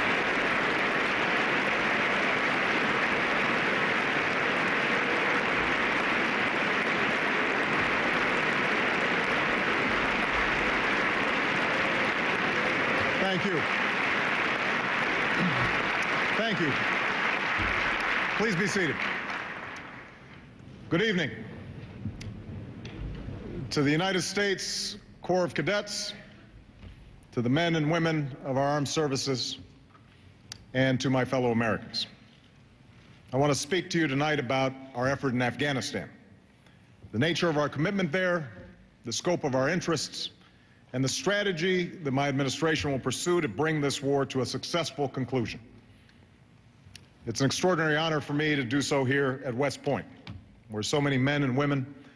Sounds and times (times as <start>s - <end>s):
Male speech, man speaking: 13.1s - 13.6s, 16.4s - 16.8s, 18.4s - 19.0s, 20.9s - 21.4s, 23.7s - 26.3s, 27.4s - 29.6s, 30.8s - 32.1s, 33.3s - 36.2s, 37.2s - 45.6s, 47.3s - 50.1s, 50.7s - 51.9s.